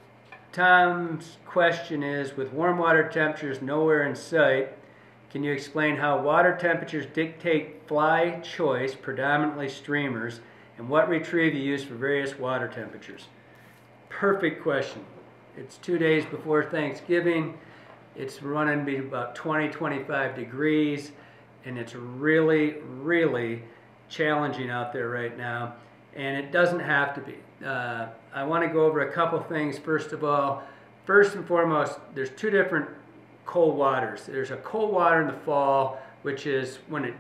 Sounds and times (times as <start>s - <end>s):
Speech: 0.5s - 13.4s, 14.1s - 17.6s, 18.2s - 37.2s.